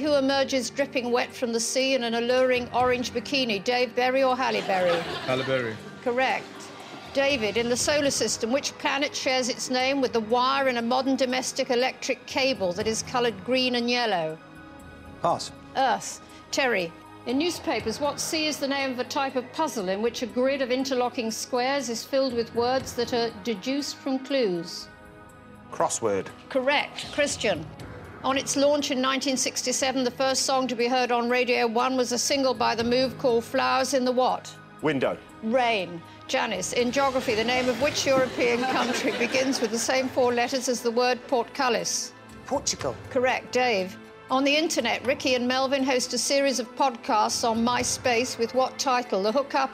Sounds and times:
Music: 0.0 - 49.7.

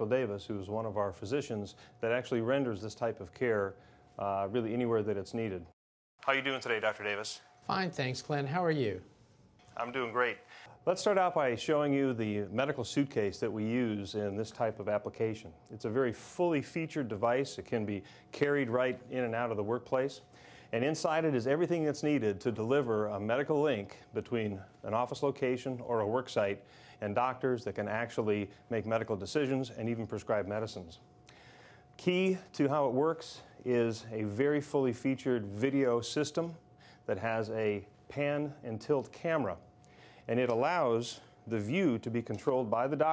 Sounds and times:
Speech: 0.0 - 8.8, 9.8 - 20.2, 20.8 - 31.0, 32.0 - 39.6, 40.3 - 43.1.

